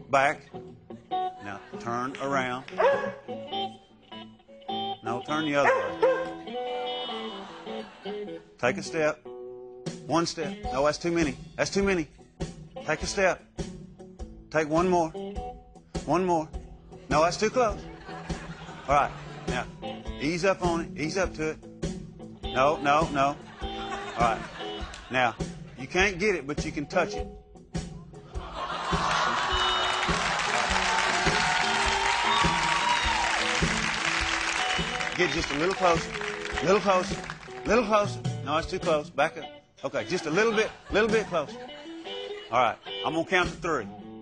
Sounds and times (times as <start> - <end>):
Music: 0.0 - 44.2
Speech: 1.4 - 2.7, 5.0 - 5.7, 8.6 - 9.2, 10.1 - 12.1, 12.8 - 13.4, 14.6 - 15.2, 16.1 - 16.5, 17.1 - 17.8, 18.9 - 21.6, 22.6 - 23.4, 24.2 - 24.4, 25.1 - 27.2, 35.2 - 41.5, 42.5 - 43.9.